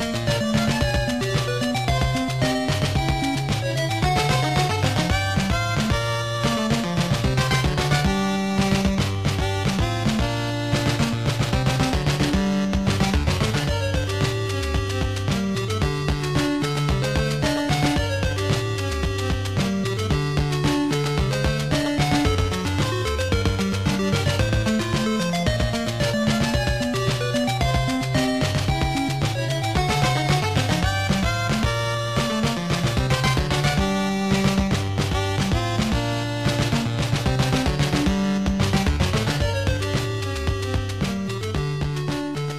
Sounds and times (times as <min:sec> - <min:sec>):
Music: 0:00.0 - 0:42.5.